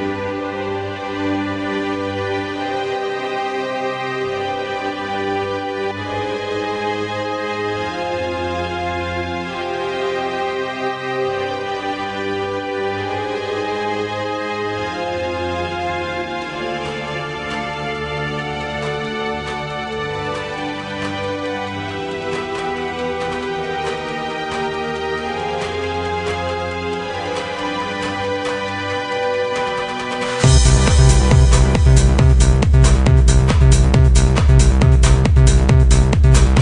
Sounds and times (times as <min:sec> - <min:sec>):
Music: 0:00.0 - 0:36.6.